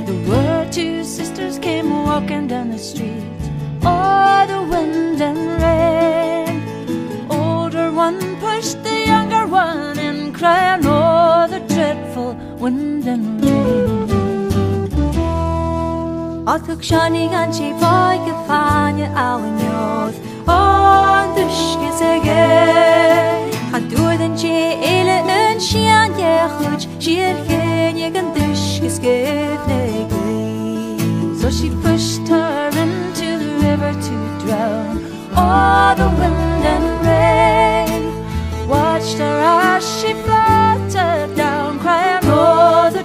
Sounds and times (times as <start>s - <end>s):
Music: 0.0s - 43.0s.